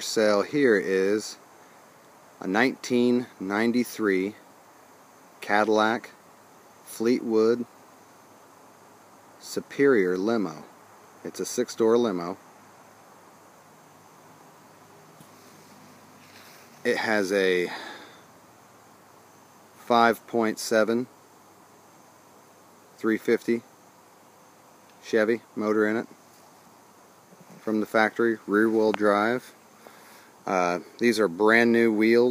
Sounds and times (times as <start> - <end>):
Speech: 0.0 - 1.4, 2.4 - 4.4, 5.4 - 6.2, 6.9 - 7.7, 9.4 - 10.7, 11.3 - 12.4, 16.8 - 18.0, 19.8 - 21.1, 23.0 - 23.7, 25.0 - 26.1, 27.6 - 29.6, 30.5 - 32.3.